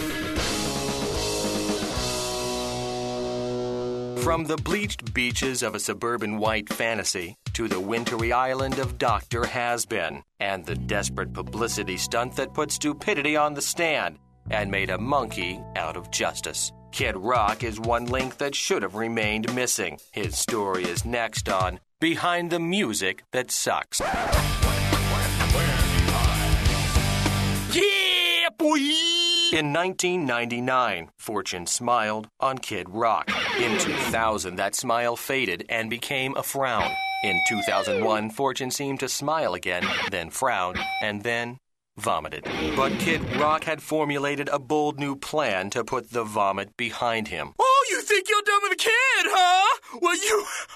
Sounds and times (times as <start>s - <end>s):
Punk rock: 0.0s - 4.4s, 24.1s - 27.7s
Speech: 4.2s - 24.3s, 25.0s - 26.6s, 27.7s - 50.7s.